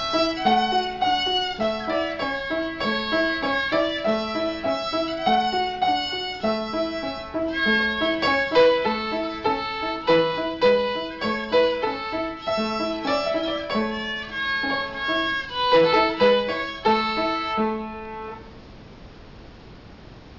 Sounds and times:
Violin, fiddle: 0:00.0 - 0:18.4.

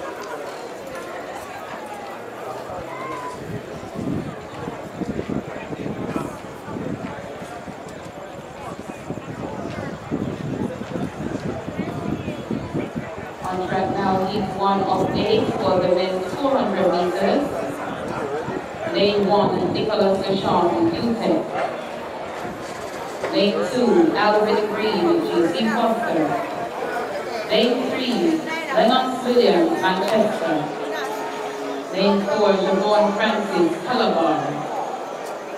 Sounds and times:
Outside, urban or manmade: 0:00.0 - 0:35.5
Speech: 0:04.5 - 0:21.6, 0:23.3 - 0:34.8.

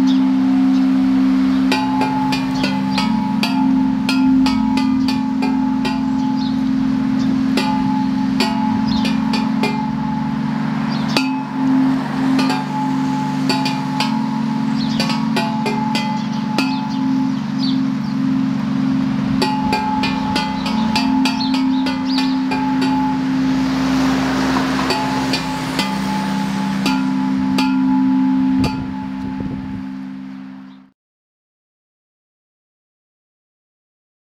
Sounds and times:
Tubular bells: 0:00.0 - 0:30.9.

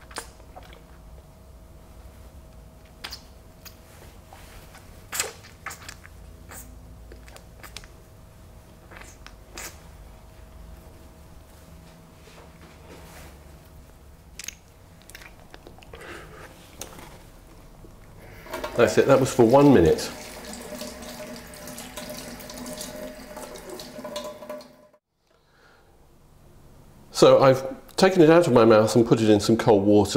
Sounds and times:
Speech: 0:18.8 - 0:20.2, 0:27.1 - 0:30.1.

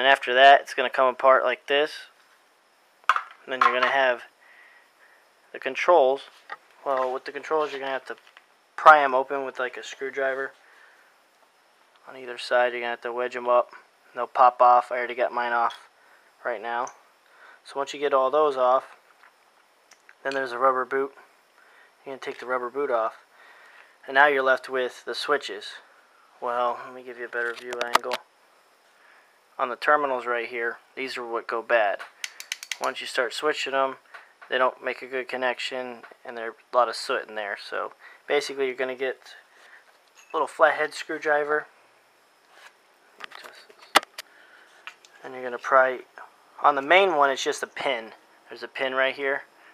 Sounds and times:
Speech: 0:00.0 - 0:02.2, 0:03.4 - 0:04.3, 0:05.5 - 0:08.2, 0:08.8 - 0:10.6, 0:12.0 - 0:17.0, 0:17.6 - 0:19.0, 0:20.2 - 0:21.2, 0:22.0 - 0:23.2, 0:24.0 - 0:28.3, 0:29.6 - 0:32.0, 0:32.8 - 0:39.4, 0:40.3 - 0:41.7, 0:45.2 - 0:49.5.

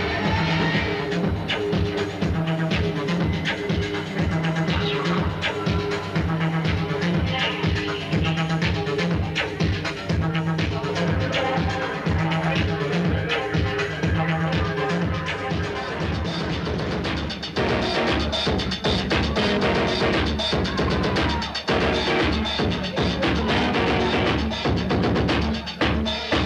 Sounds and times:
Music: 0:00.0 - 0:26.4.

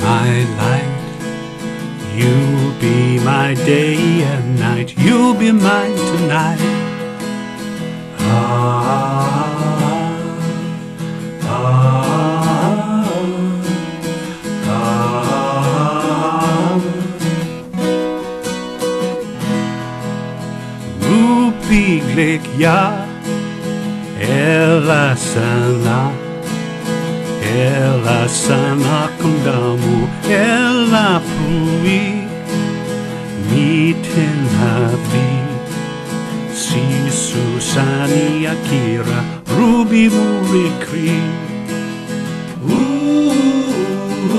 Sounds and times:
Music: 0:00.0 - 0:44.3.

